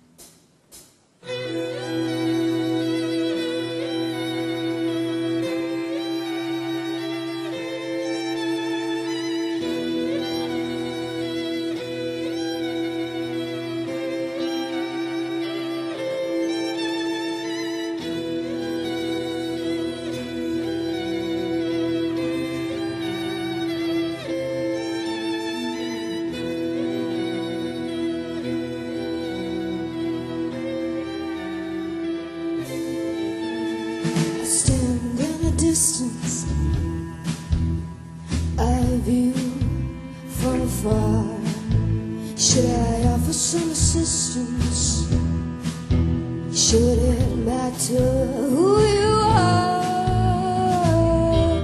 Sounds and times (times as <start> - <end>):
Music: 0.0 - 51.6.